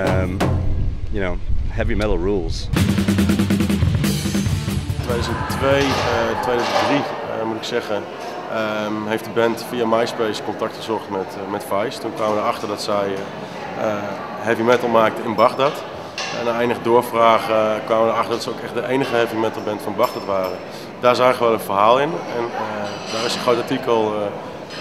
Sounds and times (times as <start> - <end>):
Speech: 0.0 - 0.5, 1.2 - 2.7, 5.0 - 24.4.